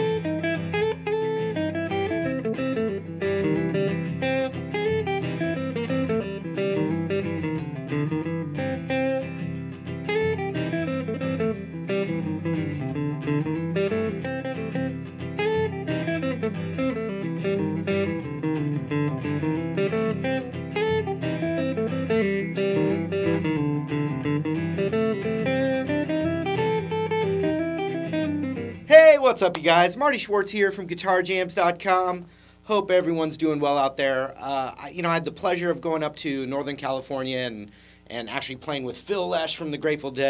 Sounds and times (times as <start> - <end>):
Acoustic guitar: 0.0 - 29.9
Electric guitar: 0.0 - 30.0
Country: 0.0 - 37.5.